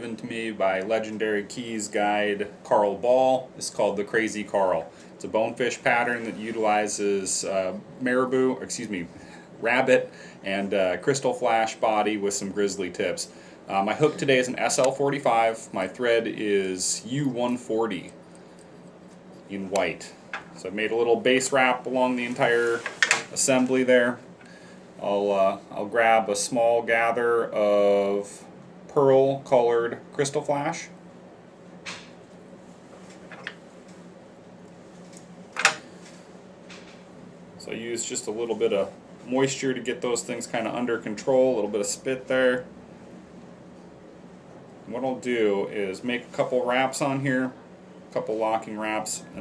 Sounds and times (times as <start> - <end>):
Speech: 0.0 - 18.2, 19.5 - 24.2, 25.0 - 31.0, 37.6 - 42.7, 44.9 - 49.4.